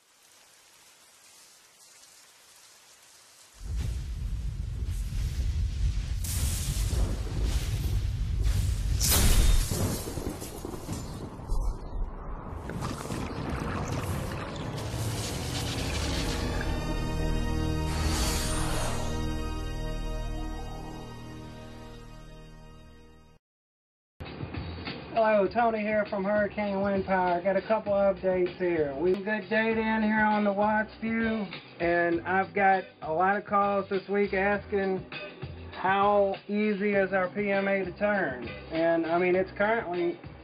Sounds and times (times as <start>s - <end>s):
Music: 15.4s - 23.4s, 24.2s - 40.4s
Speech: 25.2s - 35.0s, 35.8s - 40.2s.